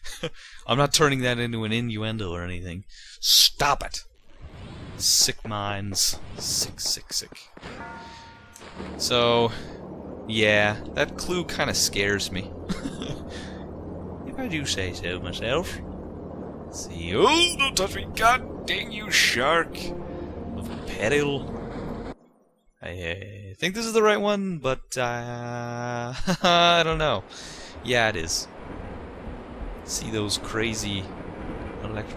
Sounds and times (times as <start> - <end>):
Speech: 0.6 - 4.1, 5.0 - 7.5, 9.0 - 9.6, 10.3 - 13.2, 14.3 - 15.8, 16.8 - 19.9, 20.6 - 21.4, 22.8 - 28.5, 29.9 - 31.1, 31.8 - 32.1.